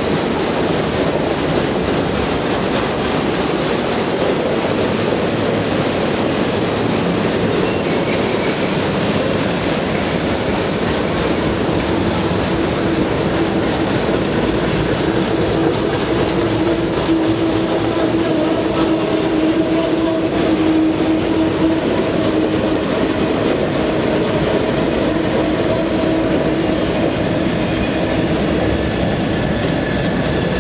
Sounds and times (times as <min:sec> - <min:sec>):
Railroad car, train wagon: 0:00.0 - 0:30.6
Train: 0:00.0 - 0:30.6.